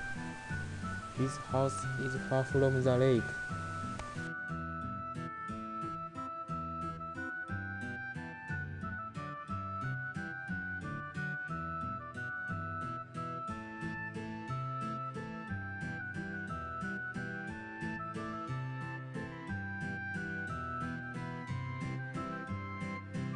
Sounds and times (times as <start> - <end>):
Music: 0.0 - 23.3.